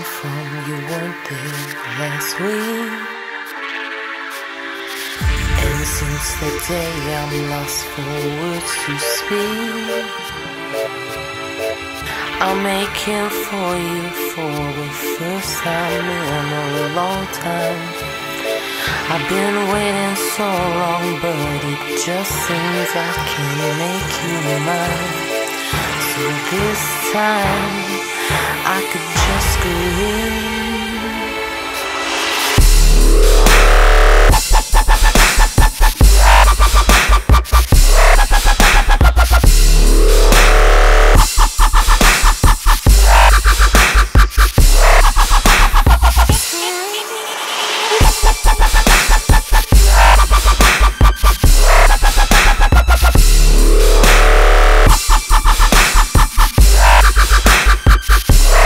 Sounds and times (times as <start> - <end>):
Electronic music: 0.0 - 58.6.